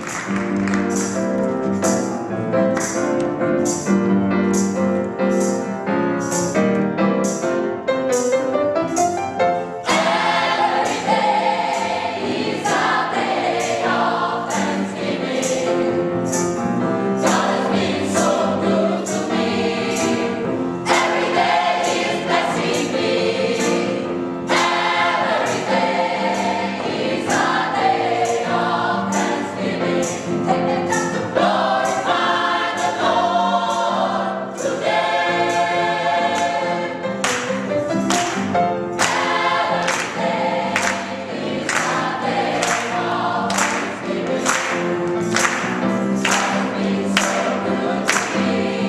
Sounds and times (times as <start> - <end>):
Choir: 9.8 - 48.8.